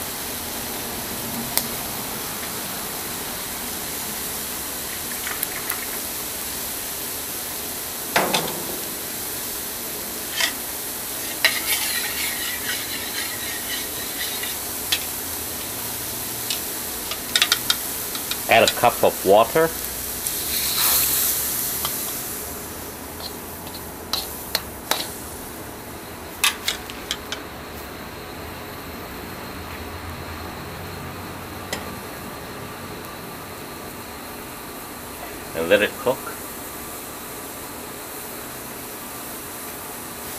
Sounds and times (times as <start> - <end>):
Frying (food): 0.0 - 40.3
Speech: 18.5 - 19.8, 35.5 - 36.4.